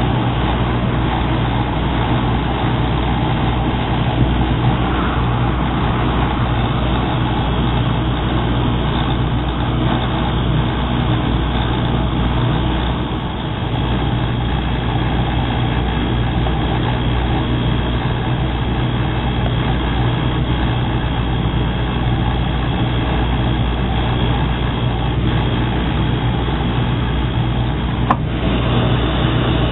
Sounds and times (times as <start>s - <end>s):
Vehicle: 0.0s - 29.7s.